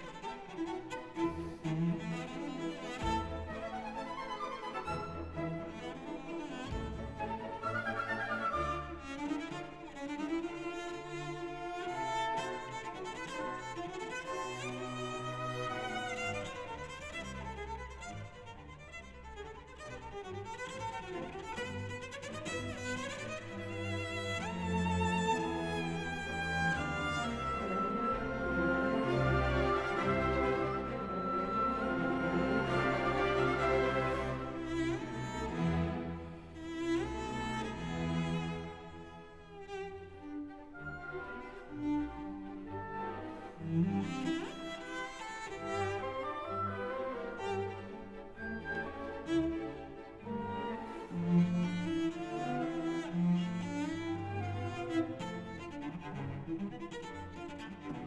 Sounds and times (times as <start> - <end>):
Cello: 0.0 - 58.0
Orchestra: 0.0 - 58.0
Violin, fiddle: 0.0 - 58.0.